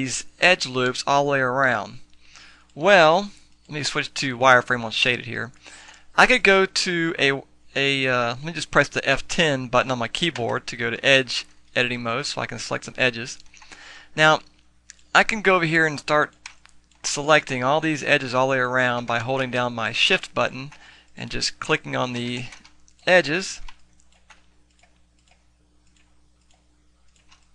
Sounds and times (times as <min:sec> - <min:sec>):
Speech: 0:00.0 - 0:02.0, 0:02.8 - 0:05.6, 0:06.2 - 0:13.4, 0:14.2 - 0:14.5, 0:15.1 - 0:16.4, 0:17.0 - 0:23.7.